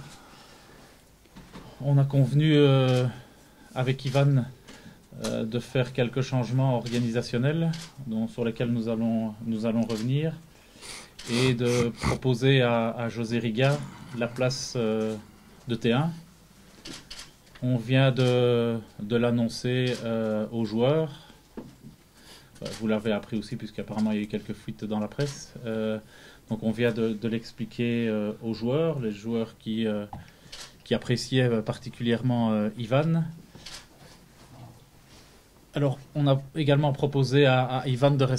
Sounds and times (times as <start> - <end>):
Speech: 1.8 - 3.2, 3.8 - 10.4, 11.2 - 16.2, 17.6 - 21.2, 22.6 - 30.2, 30.8 - 33.4, 35.7 - 38.3.